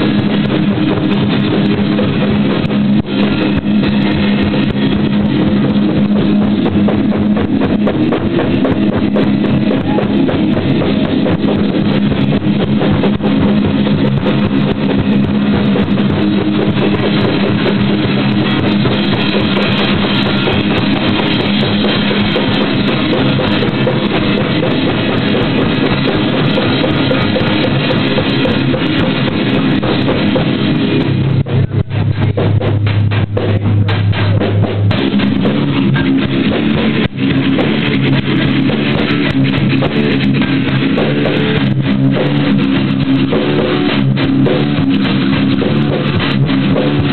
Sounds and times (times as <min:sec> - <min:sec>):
Music: 0:00.0 - 0:47.1.